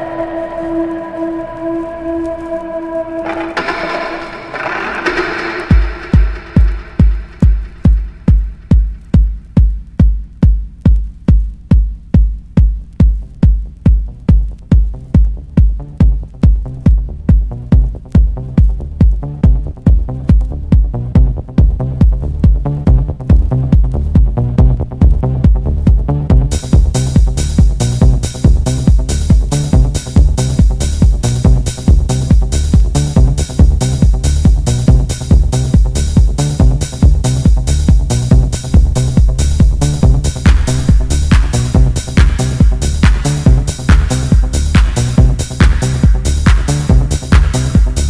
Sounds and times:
Music: 0.0s - 48.1s.

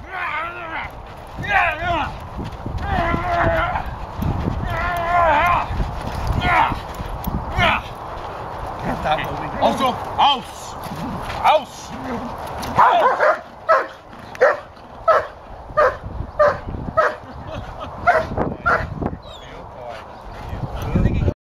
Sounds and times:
Bow-wow: 12.8s - 17.2s, 18.1s - 18.9s.

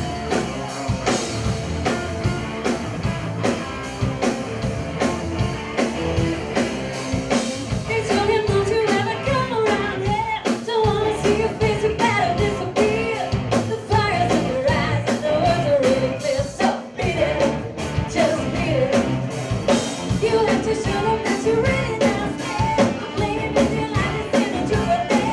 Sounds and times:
Heavy metal: 0.0s - 25.3s
Progressive rock: 0.0s - 25.3s
Punk rock: 0.0s - 25.3s
Rock and roll: 0.0s - 25.3s.

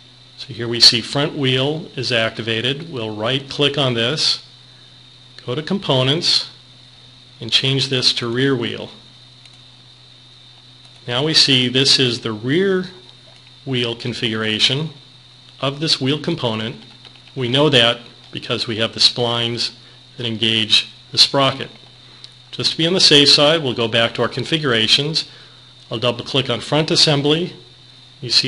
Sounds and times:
Speech: 0.4s - 4.5s, 5.4s - 6.6s, 7.4s - 9.0s, 11.0s - 13.1s, 13.7s - 15.0s, 15.6s - 21.8s, 22.5s - 28.4s.

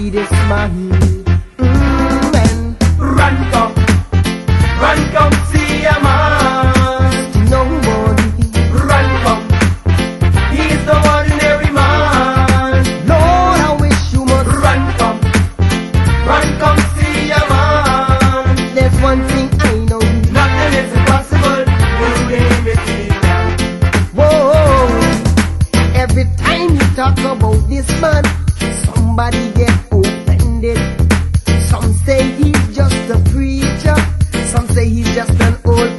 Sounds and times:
Music: 0.0s - 35.9s.

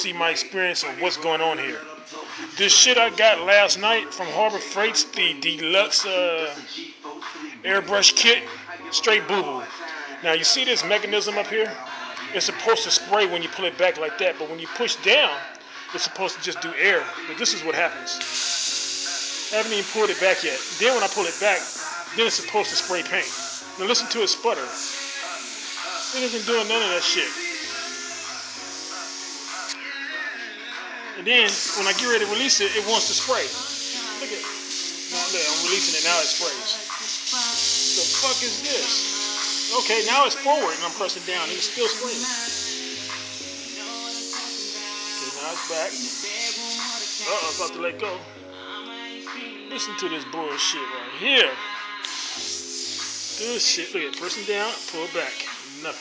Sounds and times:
Speech: 0.0s - 1.9s, 2.5s - 6.8s, 7.6s - 18.2s, 19.5s - 24.8s, 26.1s - 27.4s, 31.2s - 34.5s, 35.2s - 36.8s, 37.4s - 39.0s, 39.7s - 42.4s, 45.2s - 46.1s, 47.2s - 48.2s, 49.7s - 51.6s, 53.4s - 56.0s
Music: 0.0s - 56.0s.

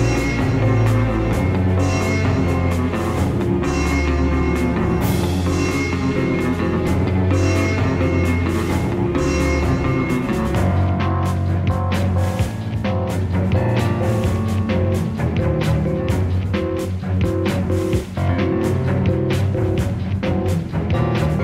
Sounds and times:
Music: 0.0s - 21.4s.

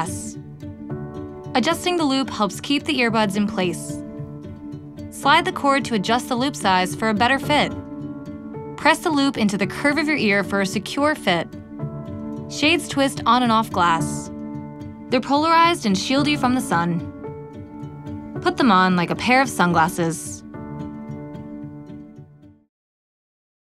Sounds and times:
Speech: 0.0s - 0.4s, 1.6s - 4.0s, 5.2s - 7.7s, 8.8s - 11.4s, 12.5s - 14.3s, 15.1s - 17.0s, 18.4s - 20.4s
Music: 0.0s - 22.7s.

